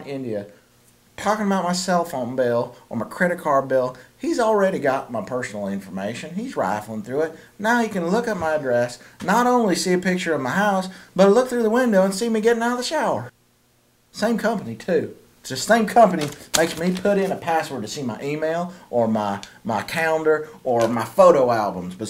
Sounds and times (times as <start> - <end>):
Speech: 0.0 - 0.6, 1.2 - 13.3, 14.1 - 22.0.